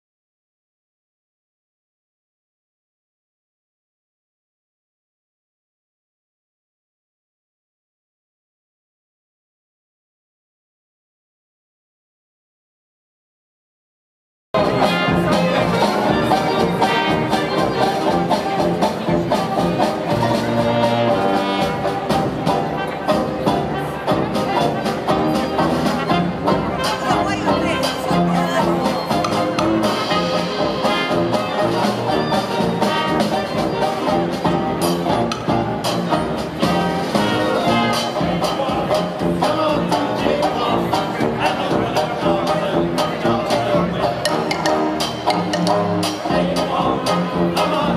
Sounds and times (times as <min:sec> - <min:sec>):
Orchestra: 0:14.6 - 0:47.9.